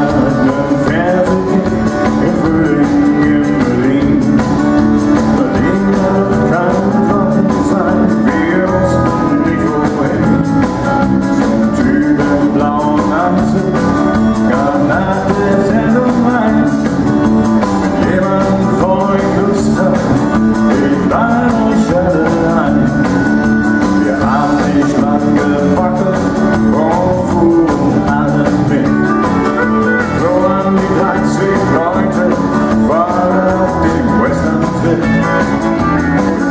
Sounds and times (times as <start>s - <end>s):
Music: 0.0s - 36.5s.